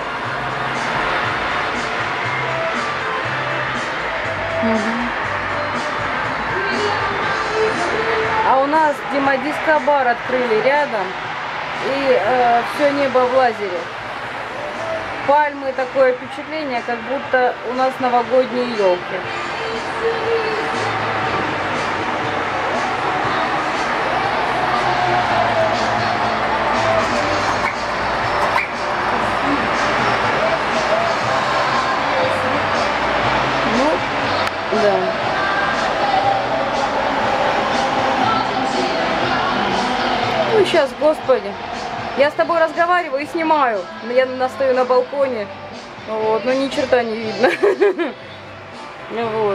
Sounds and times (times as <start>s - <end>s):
Music: 0.0s - 49.5s
Speech: 4.6s - 5.1s, 6.5s - 11.2s, 11.8s - 13.9s, 15.2s - 20.8s, 34.7s - 35.2s, 40.4s - 41.6s, 42.2s - 48.0s, 49.1s - 49.5s.